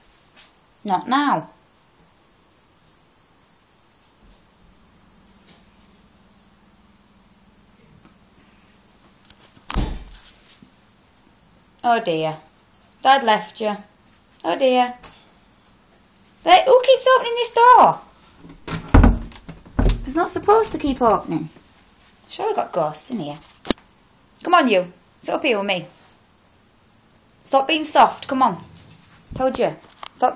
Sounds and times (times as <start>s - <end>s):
Speech: 0.8s - 1.6s, 11.8s - 15.0s, 16.4s - 18.1s, 20.0s - 21.6s, 22.3s - 23.4s, 24.4s - 26.0s, 27.5s - 28.7s, 29.4s - 30.3s.